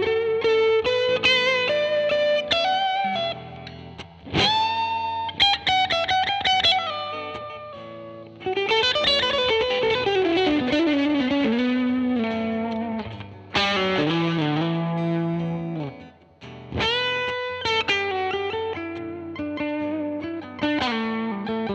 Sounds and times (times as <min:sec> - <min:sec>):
Electric guitar: 0:00.0 - 0:21.7.